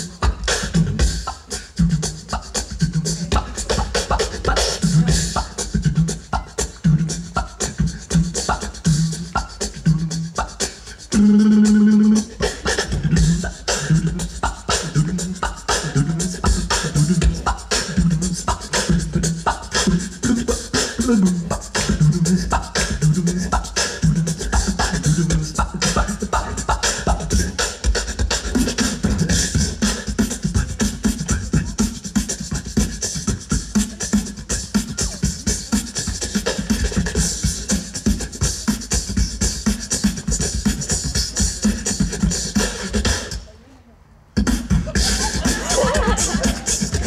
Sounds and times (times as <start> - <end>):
Music: 0.0 - 43.4, 44.4 - 47.0.